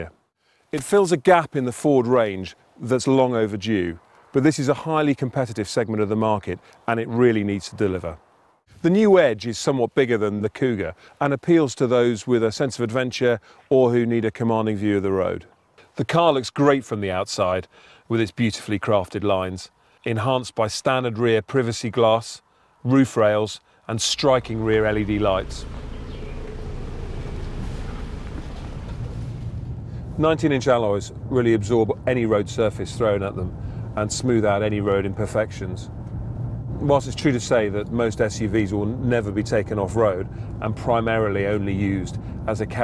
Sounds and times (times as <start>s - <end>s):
Speech: 0.8s - 8.2s, 8.8s - 25.7s, 30.2s - 35.9s, 36.8s - 42.8s.